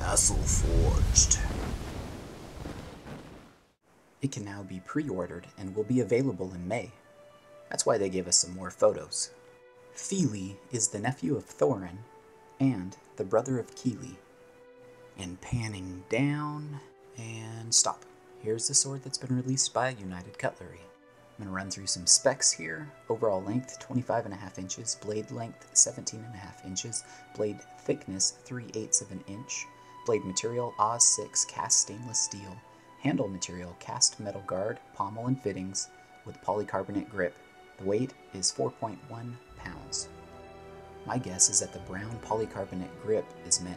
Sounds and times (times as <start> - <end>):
Music: 0.0 - 1.6, 4.2 - 43.7
Speech: 0.0 - 1.6, 4.2 - 7.0, 7.7 - 9.4, 10.0 - 14.2, 15.2 - 40.1, 41.1 - 43.7.